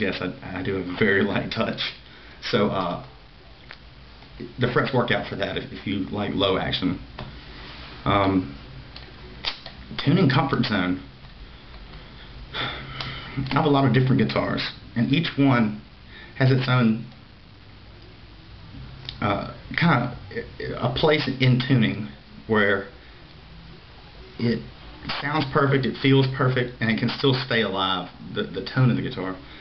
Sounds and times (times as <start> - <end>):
Speech: 0.0 - 3.2, 4.4 - 7.1, 8.0 - 8.6, 9.9 - 11.1, 13.4 - 15.8, 16.4 - 17.1, 19.1 - 23.0, 24.0 - 29.4.